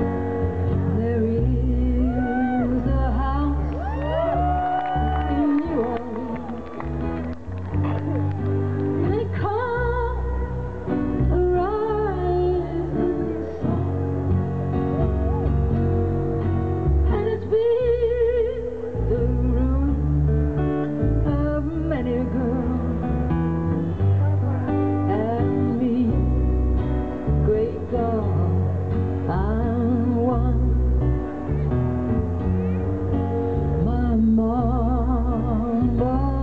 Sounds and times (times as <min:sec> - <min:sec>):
Music: 0:00.0 - 0:36.4.